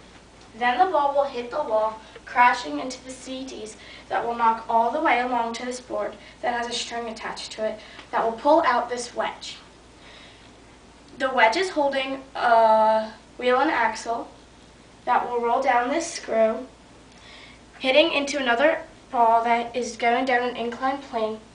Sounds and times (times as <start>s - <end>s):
Speech: 0.5s - 9.7s, 11.2s - 14.4s, 15.0s - 16.8s, 17.8s - 21.5s.